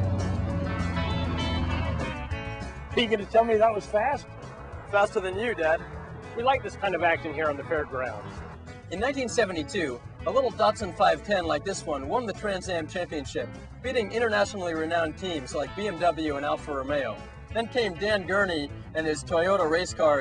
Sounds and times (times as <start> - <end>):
Music: 0.0 - 20.2.